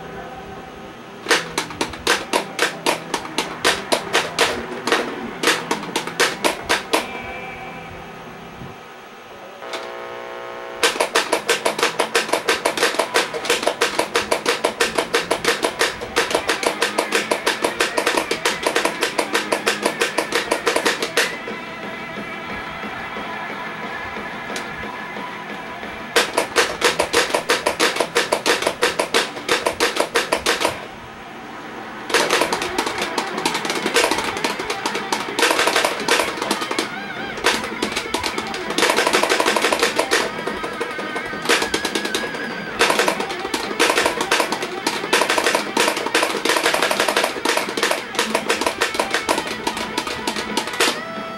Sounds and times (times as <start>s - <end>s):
Guitar: 0.0s - 51.3s.